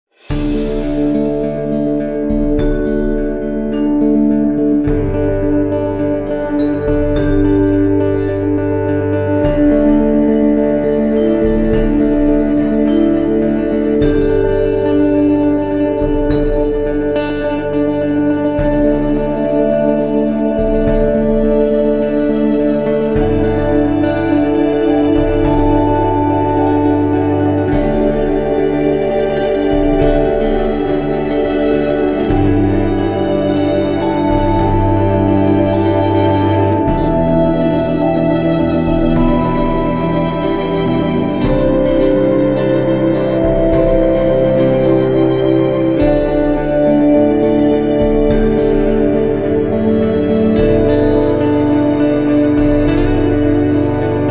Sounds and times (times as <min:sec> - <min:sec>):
Music: 0:00.0 - 0:54.3.